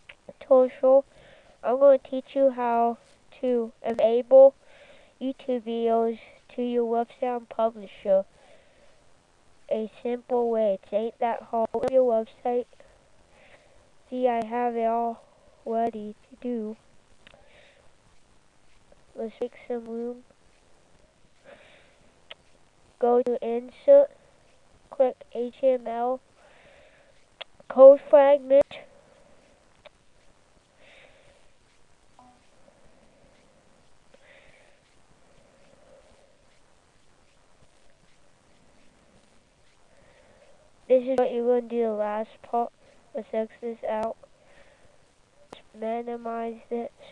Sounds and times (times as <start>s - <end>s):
Speech: 0.2s - 4.6s, 5.2s - 8.3s, 9.7s - 12.8s, 14.1s - 16.8s, 19.2s - 20.3s, 23.0s - 24.2s, 24.9s - 26.3s, 27.7s - 28.9s, 40.9s - 44.2s, 45.6s - 47.1s.